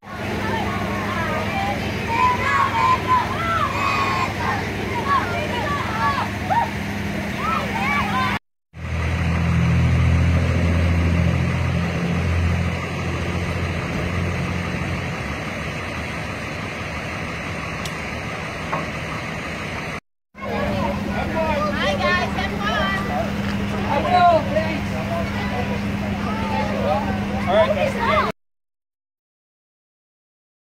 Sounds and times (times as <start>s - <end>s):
Vehicle: 0.0s - 28.4s
Speech: 20.4s - 28.3s.